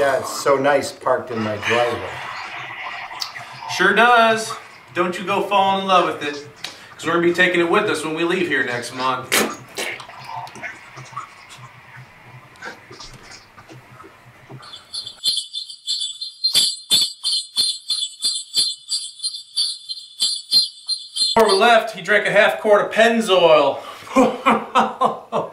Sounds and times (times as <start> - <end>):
Speech: 0.0 - 2.2, 3.7 - 9.3, 21.4 - 23.8.